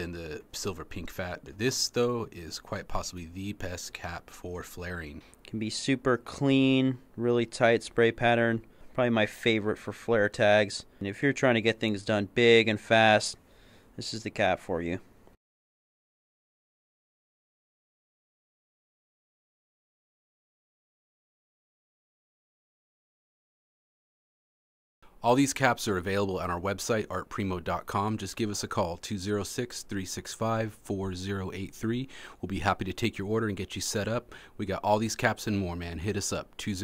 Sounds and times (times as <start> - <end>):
Speech: 0.0 - 13.4, 14.0 - 15.1, 25.2 - 36.8.